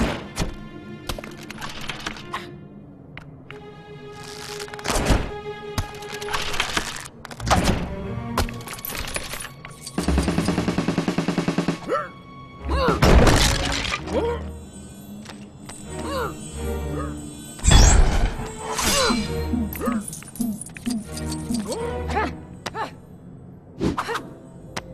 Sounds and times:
Music: 0.0s - 24.9s
Shatter: 17.3s - 20.4s.

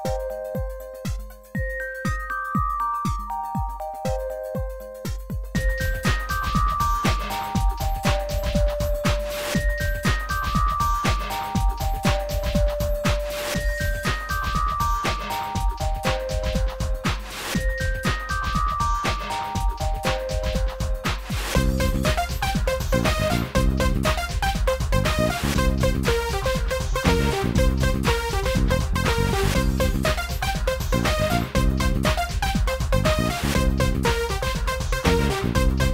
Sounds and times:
Music: 0.0s - 35.9s.

